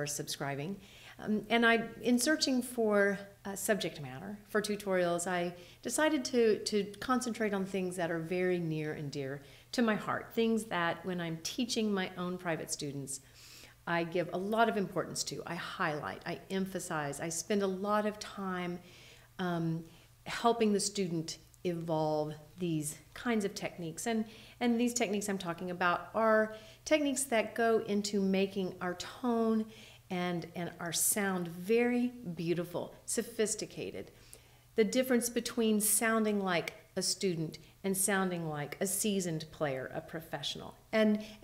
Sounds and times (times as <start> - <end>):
Speech: 0.0 - 13.2, 13.9 - 18.8, 19.4 - 34.1, 34.8 - 41.2.